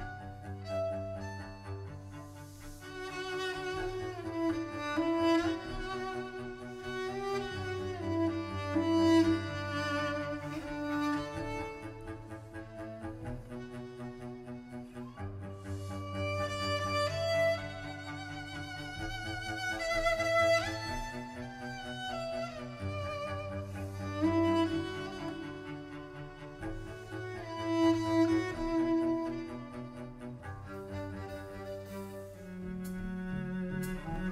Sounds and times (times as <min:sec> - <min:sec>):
Cello: 0:00.0 - 0:34.3
Double bass: 0:00.0 - 0:34.3
Orchestra: 0:00.0 - 0:34.3
String section: 0:00.0 - 0:34.3
Violin, fiddle: 0:00.0 - 0:34.3.